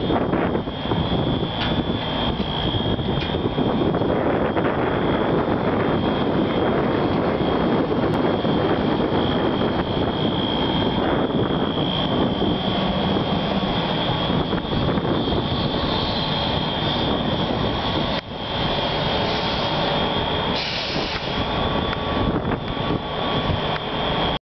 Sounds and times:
Medium engine (mid frequency): 0:00.0 - 0:24.4
Vehicle: 0:00.0 - 0:24.4.

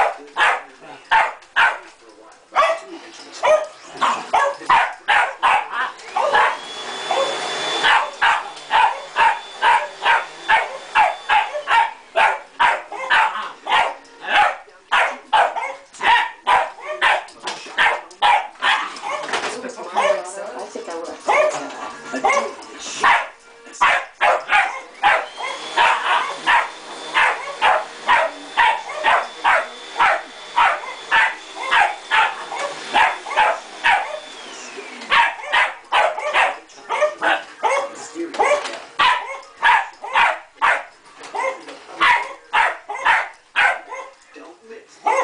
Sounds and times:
Bow-wow: 0:00.0 - 0:01.8, 0:02.6 - 0:06.6, 0:07.8 - 0:19.4, 0:22.3 - 0:34.2, 0:35.1 - 0:44.1
Speech: 0:00.0 - 0:05.3, 0:16.1 - 0:18.3, 0:19.5 - 0:22.6, 0:36.4 - 0:38.6.

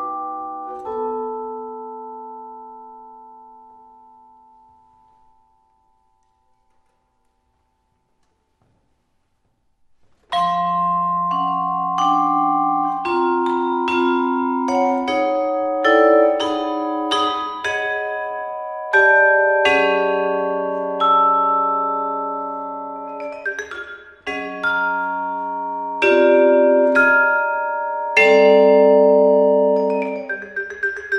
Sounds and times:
Glockenspiel: 0:00.0 - 0:08.6, 0:10.3 - 0:31.1
Marimba, xylophone: 0:10.3 - 0:31.1.

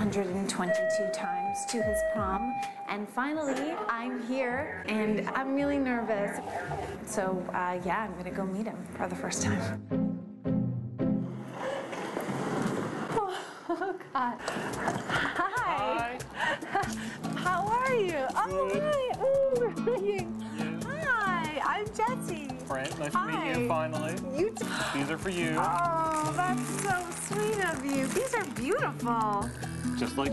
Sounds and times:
Female speech, woman speaking: 0:00.0 - 0:09.7, 0:15.5 - 0:16.2, 0:17.5 - 0:24.7, 0:25.5 - 0:29.5.

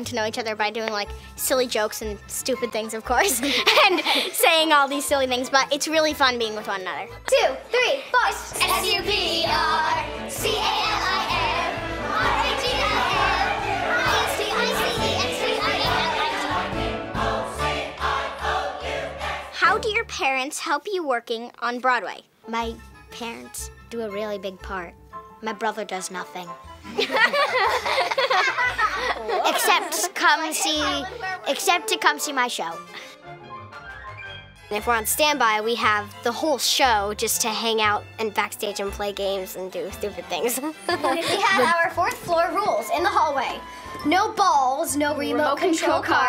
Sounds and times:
Child speech, kid speaking: 0:00.0 - 0:03.4, 0:04.4 - 0:09.9, 0:19.6 - 0:26.6, 0:29.2 - 0:32.8, 0:34.7 - 0:46.2
Music: 0:00.0 - 0:21.1, 0:21.8 - 0:46.2.

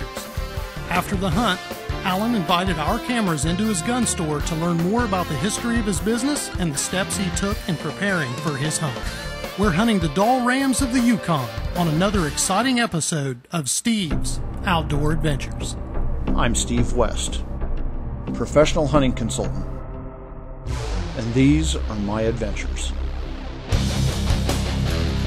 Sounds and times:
Music: 0:00.0 - 0:13.0, 0:14.1 - 0:25.2
Speech: 0:00.9 - 0:09.0, 0:09.6 - 0:17.4, 0:18.3 - 0:19.7, 0:21.1 - 0:23.0.

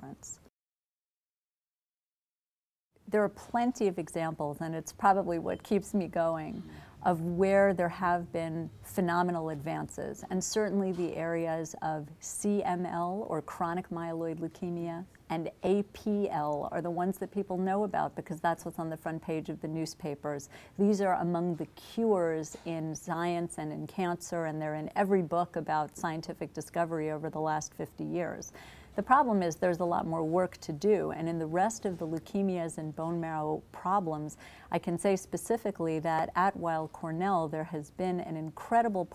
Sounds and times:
Speech: 0:00.0 - 0:00.5, 0:03.1 - 0:39.1.

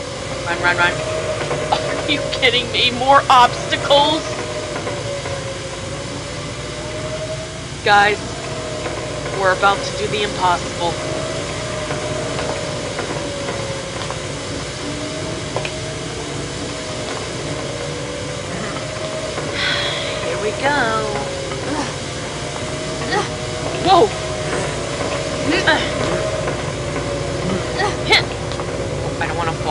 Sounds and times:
Speech: 0:00.5 - 0:01.0, 0:01.8 - 0:04.3, 0:07.8 - 0:08.2, 0:09.4 - 0:11.0, 0:20.2 - 0:21.9, 0:23.1 - 0:24.2, 0:27.8 - 0:28.3, 0:29.2 - 0:29.7.

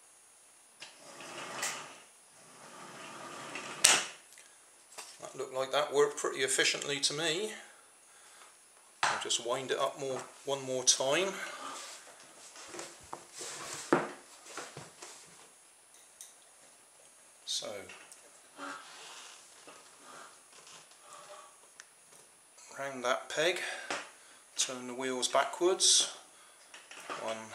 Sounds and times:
Inside, small room: 0:00.0 - 0:27.5
Speech: 0:05.2 - 0:07.7, 0:09.2 - 0:11.6, 0:17.5 - 0:18.0, 0:22.7 - 0:23.9, 0:24.6 - 0:26.2, 0:27.1 - 0:27.5.

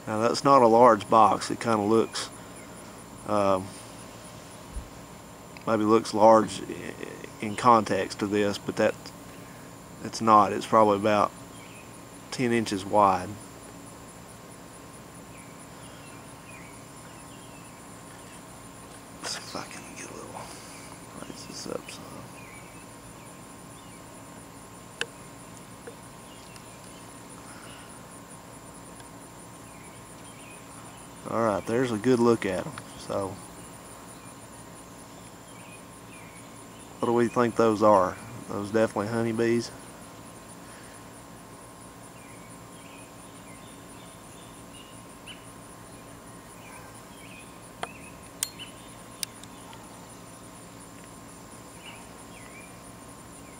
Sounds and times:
Cricket: 0:00.0 - 0:53.5.

